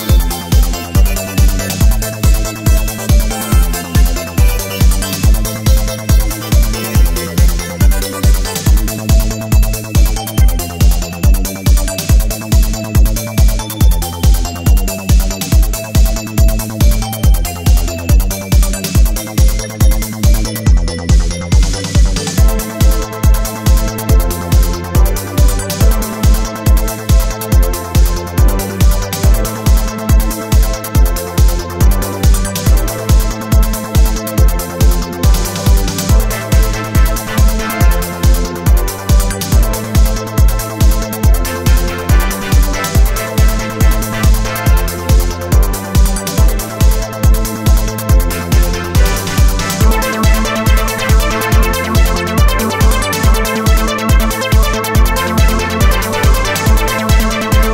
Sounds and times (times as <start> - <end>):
Disco: 0.0 - 57.7
Trance music: 0.0 - 57.7.